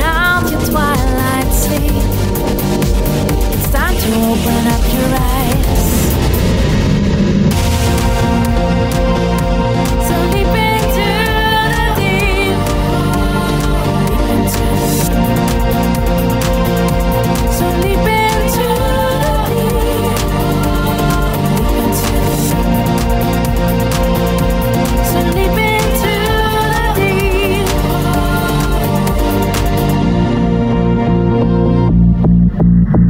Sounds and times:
Music: 0.0s - 33.0s.

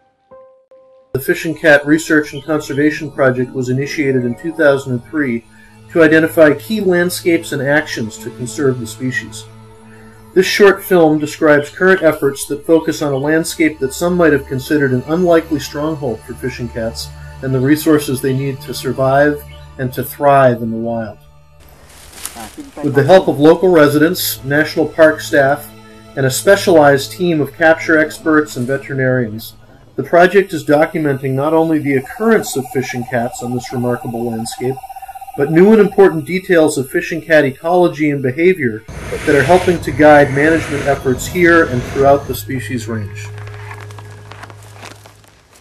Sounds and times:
Music: 0.0s - 45.6s
Speech: 1.2s - 9.5s, 10.4s - 21.2s, 22.3s - 34.8s, 35.4s - 43.3s.

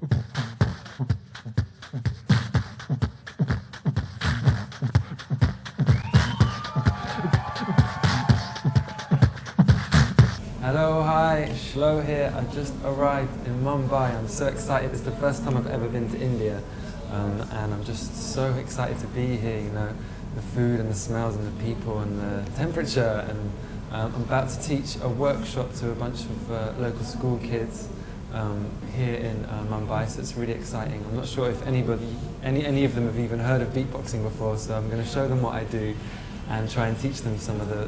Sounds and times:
Music: 0.0s - 10.4s
Speech: 10.6s - 37.8s.

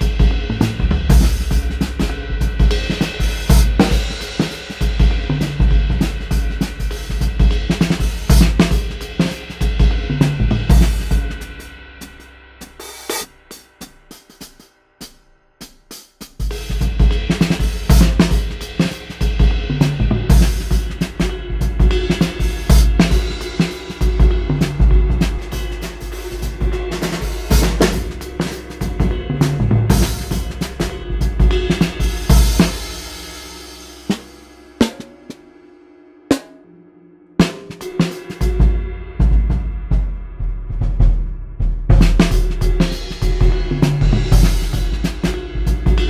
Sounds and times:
Music: 0.0s - 46.0s.

